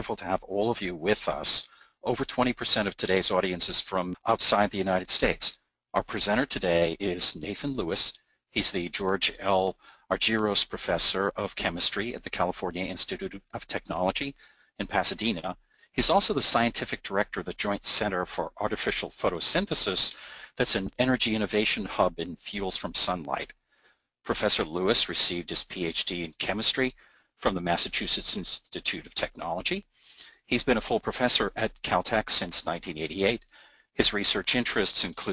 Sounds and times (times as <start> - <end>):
Speech: 0.0 - 23.6, 24.3 - 35.3.